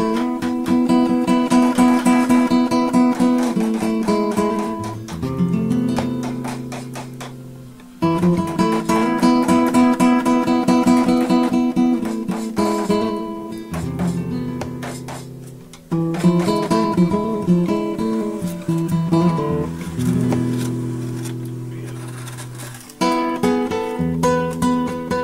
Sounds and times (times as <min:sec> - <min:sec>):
Music: 0:00.0 - 0:25.2
Chop: 0:00.2 - 0:05.2, 0:05.9 - 0:07.4, 0:08.2 - 0:13.0, 0:13.7 - 0:15.3.